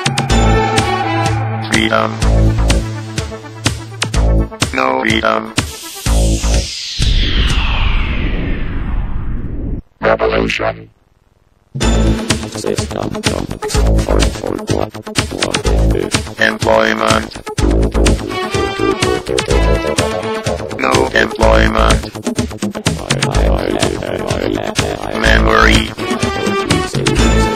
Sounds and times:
Music: 0.0 - 7.7, 11.8 - 27.5
Speech synthesizer: 1.7 - 2.2, 4.7 - 5.6, 10.0 - 10.9, 12.6 - 17.4, 18.8 - 22.1, 23.0 - 27.5.

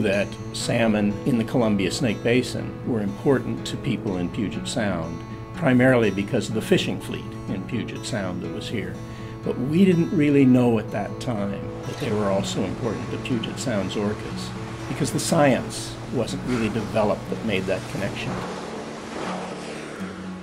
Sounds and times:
Music: 0.0 - 20.4.

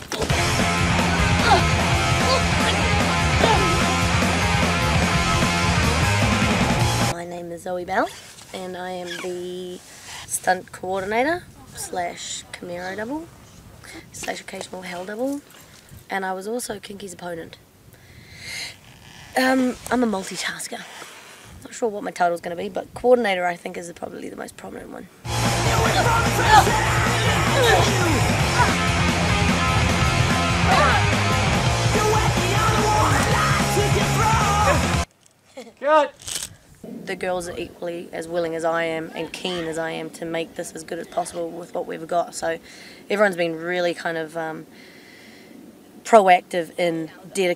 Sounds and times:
Music: 0.3 - 7.1, 25.3 - 35.1.

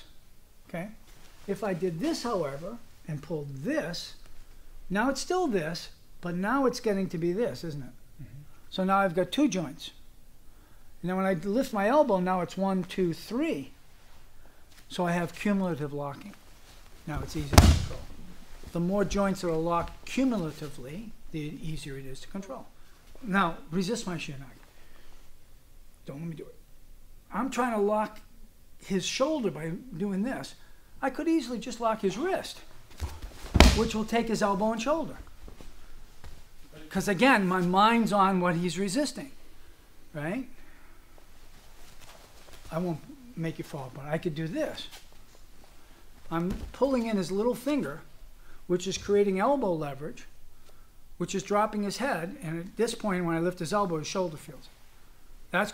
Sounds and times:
Speech: 0.7 - 4.2, 4.9 - 10.0, 11.0 - 13.8, 14.9 - 16.4, 17.0 - 18.1, 18.7 - 24.6, 26.0 - 26.6, 27.3 - 32.7, 33.6 - 35.3, 36.7 - 39.4, 40.1 - 40.6, 42.7 - 45.0, 46.3 - 48.1, 48.7 - 50.3, 51.2 - 54.7, 55.5 - 55.7.

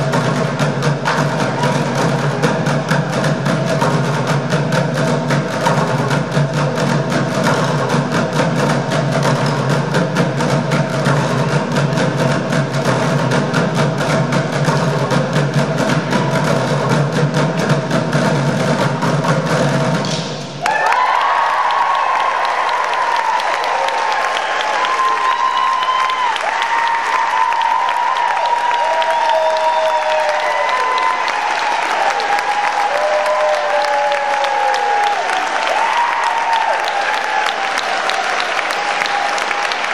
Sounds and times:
Applause: 20.6 - 39.9.

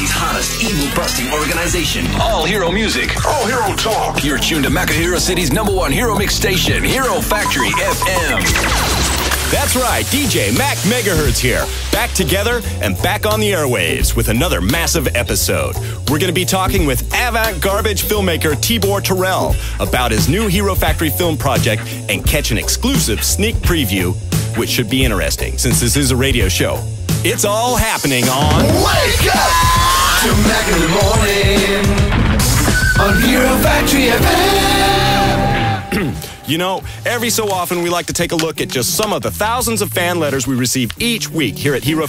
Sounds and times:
Speech: 0.0 - 8.5, 9.5 - 31.3, 35.9 - 42.0
Music: 0.0 - 42.0.

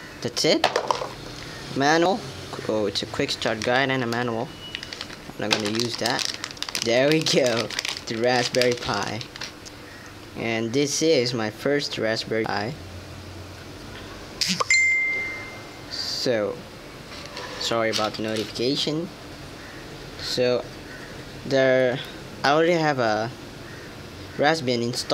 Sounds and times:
Speech: 0.2 - 0.7, 1.8 - 4.5, 5.4 - 6.2, 6.8 - 9.3, 10.4 - 12.8, 15.9 - 16.6, 17.6 - 19.2, 20.2 - 20.7, 21.5 - 23.4, 24.4 - 25.1.

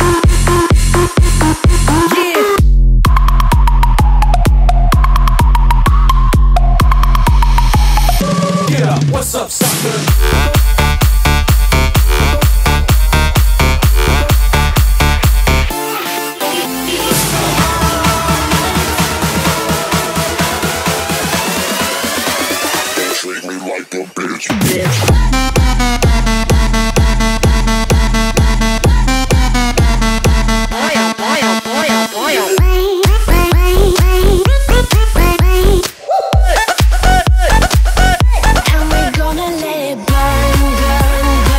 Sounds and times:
Music: 0.0 - 41.5.

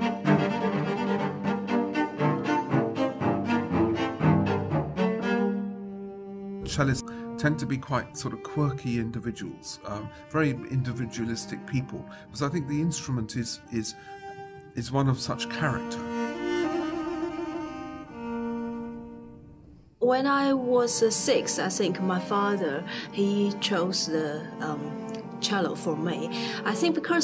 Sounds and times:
Music: 0.0 - 27.2
Speech: 6.6 - 14.0, 14.8 - 16.1, 20.0 - 27.2.

